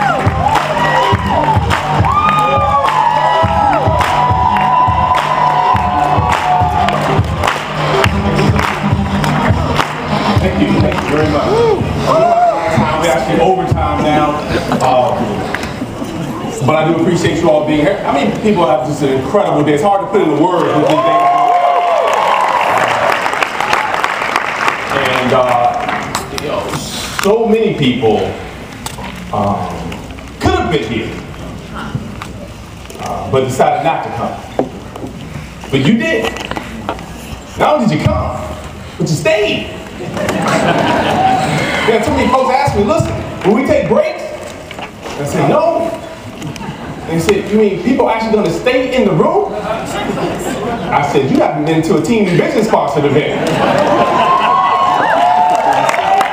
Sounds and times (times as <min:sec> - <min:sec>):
Inside, large room or hall: 0:00.0 - 0:56.3
Speech: 0:47.1 - 0:49.9, 0:50.9 - 0:53.4.